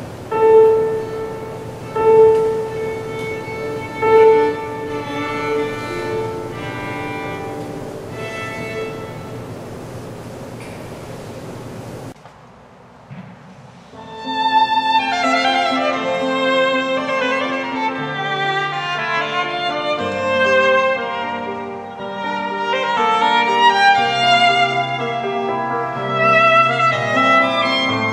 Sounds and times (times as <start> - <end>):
Violin, fiddle: 0.3 - 9.6, 14.0 - 28.1.